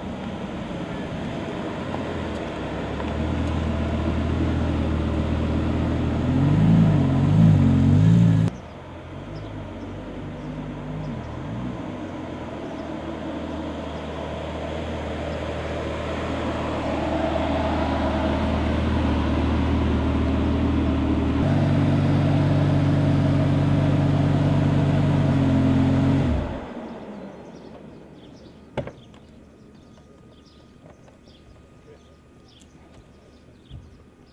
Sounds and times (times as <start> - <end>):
Car: 0.0 - 34.3
Outside, urban or manmade: 0.0 - 34.3.